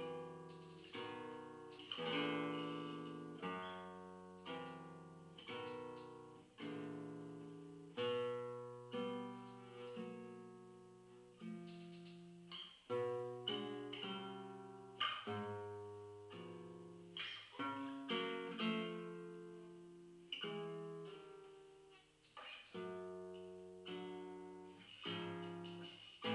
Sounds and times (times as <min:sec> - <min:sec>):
Acoustic guitar: 0:00.0 - 0:26.3.